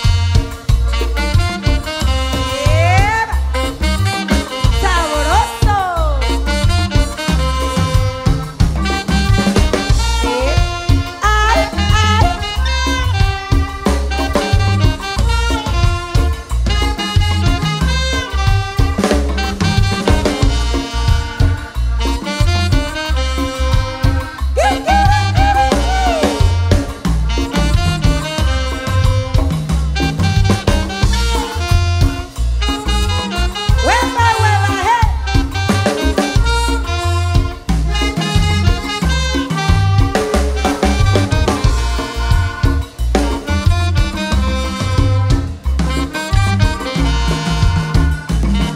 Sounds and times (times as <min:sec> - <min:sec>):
Music: 0:00.0 - 0:48.7.